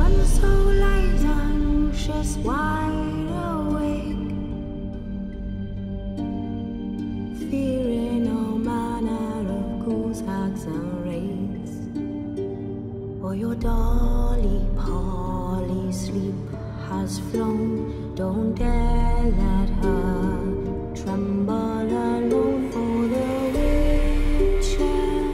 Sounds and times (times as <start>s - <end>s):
Lullaby: 0.0s - 25.3s.